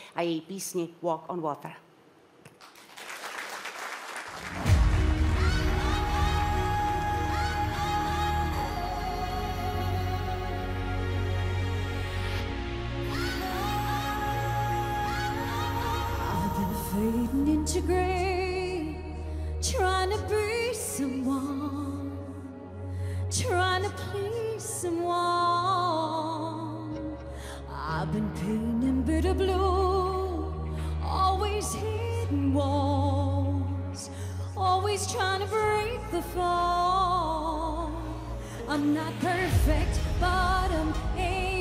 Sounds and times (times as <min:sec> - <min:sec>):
Music: 0:04.3 - 0:41.6.